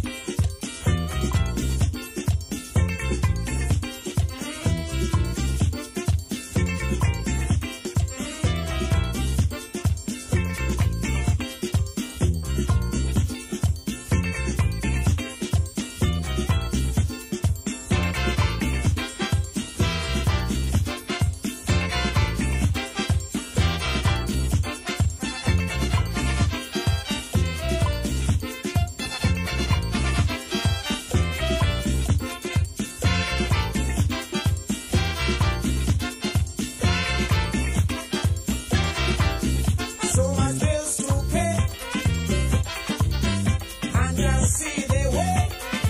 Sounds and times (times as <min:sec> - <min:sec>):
Music: 0:00.0 - 0:45.8.